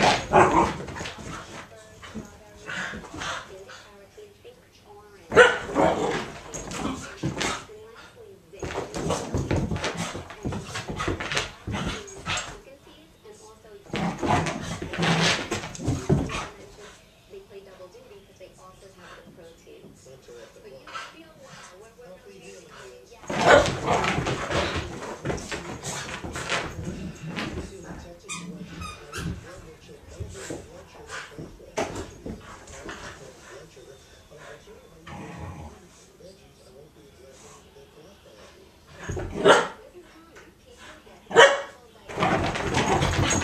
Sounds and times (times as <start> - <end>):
Speech: 0.0 - 43.4.